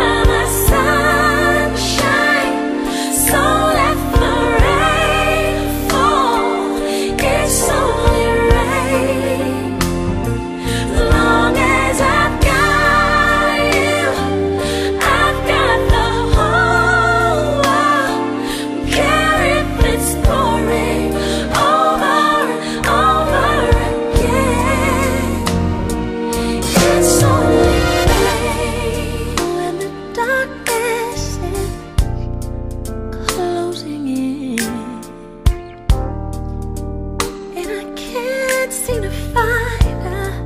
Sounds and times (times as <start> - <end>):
Music: 0.0 - 40.4.